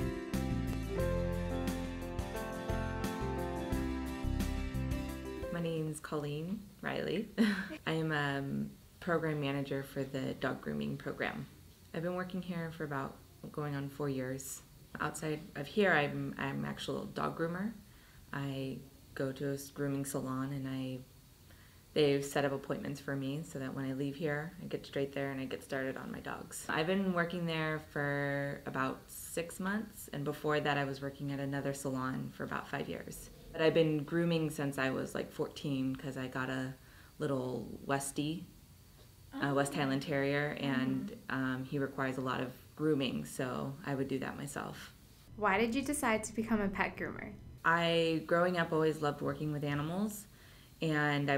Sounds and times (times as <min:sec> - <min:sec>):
Speech: 0:05.5 - 0:21.0, 0:22.0 - 0:38.5, 0:39.4 - 0:51.3.